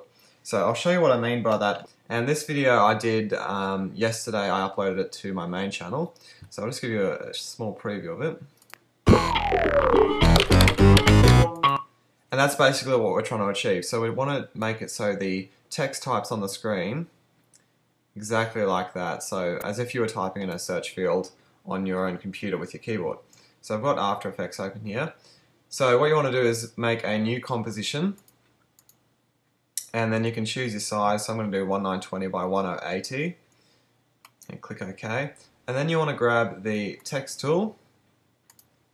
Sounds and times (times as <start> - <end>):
Speech: 0.0 - 8.5, 12.3 - 17.1, 18.2 - 28.2, 29.8 - 33.4, 34.4 - 37.8.